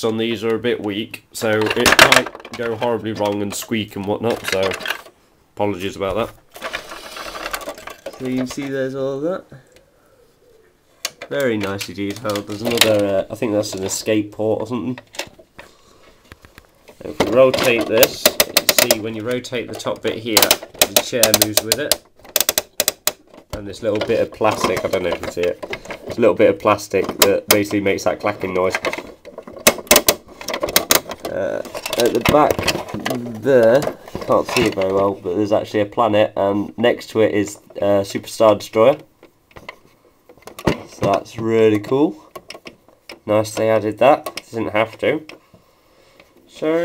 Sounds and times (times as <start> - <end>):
Speech: 0.0 - 4.9, 5.6 - 6.4, 8.1 - 9.7, 11.2 - 15.1, 17.0 - 22.0, 23.5 - 28.9, 31.3 - 39.1, 40.8 - 42.3, 43.2 - 45.3, 46.5 - 46.8
Inside, small room: 0.0 - 46.8.